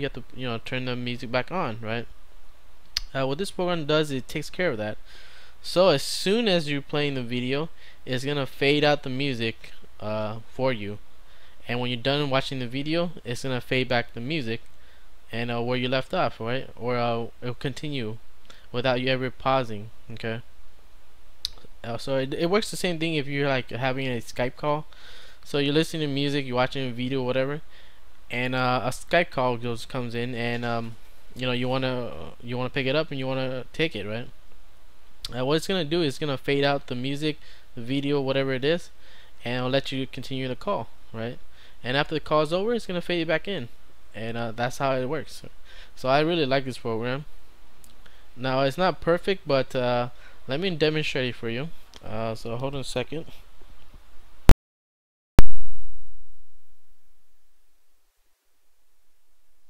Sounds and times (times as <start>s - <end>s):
Speech: 0.0s - 2.1s, 3.0s - 5.0s, 5.6s - 11.0s, 11.6s - 14.6s, 15.3s - 20.5s, 21.5s - 27.6s, 28.3s - 34.3s, 35.3s - 47.3s, 48.4s - 53.4s.